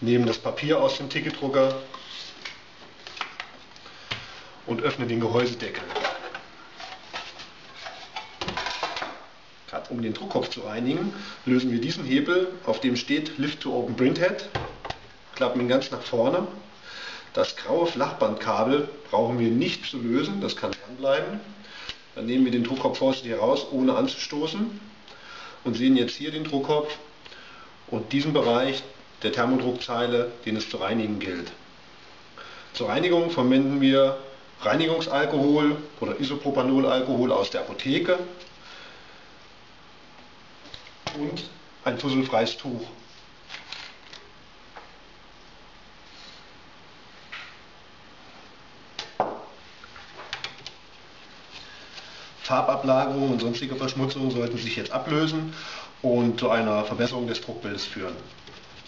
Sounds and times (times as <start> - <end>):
Speech: 0.0 - 2.0, 4.7 - 6.1, 9.7 - 14.6, 15.4 - 16.7, 17.4 - 21.6, 22.2 - 24.9, 25.6 - 27.1, 27.9 - 31.6, 32.8 - 38.5, 41.1 - 43.1, 52.4 - 58.4.